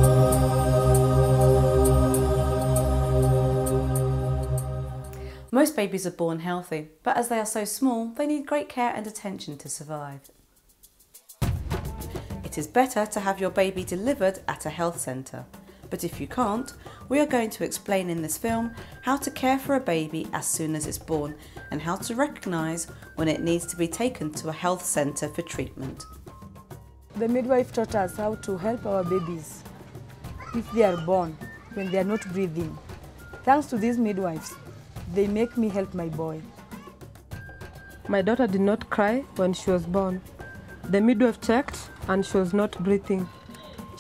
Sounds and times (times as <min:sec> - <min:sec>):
Music: 0:00.0 - 0:05.8, 0:09.9 - 0:44.0
Speech: 0:05.5 - 0:10.3, 0:12.5 - 0:26.0, 0:27.2 - 0:29.6, 0:30.4 - 0:32.8, 0:33.5 - 0:36.5, 0:38.1 - 0:40.2, 0:40.9 - 0:44.0.